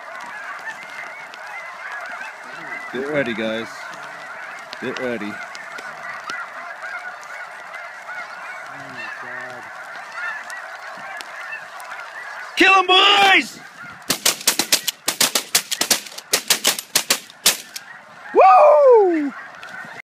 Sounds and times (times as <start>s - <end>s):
Honk: 0.0s - 18.4s, 19.0s - 20.0s.